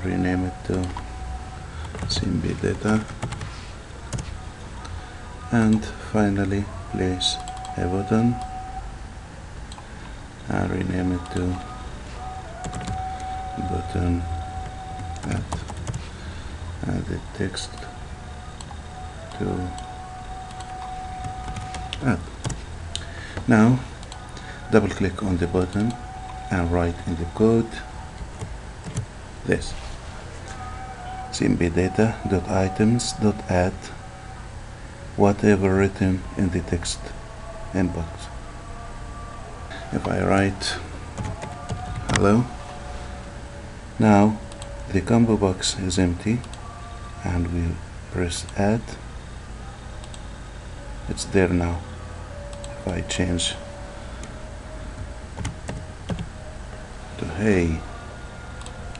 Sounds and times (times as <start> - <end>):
Speech: 0.0 - 1.0, 2.1 - 3.1, 4.8 - 8.5, 10.5 - 11.8, 13.6 - 14.4, 15.2 - 15.6, 16.8 - 18.0, 19.3 - 19.8, 22.0 - 22.2, 23.5 - 23.8, 24.7 - 27.9, 29.4 - 29.8, 31.3 - 34.0, 35.2 - 38.4, 39.7 - 40.9, 42.1 - 42.6, 44.0 - 46.5, 47.2 - 49.0, 51.1 - 51.8, 52.8 - 53.6, 57.2 - 57.9.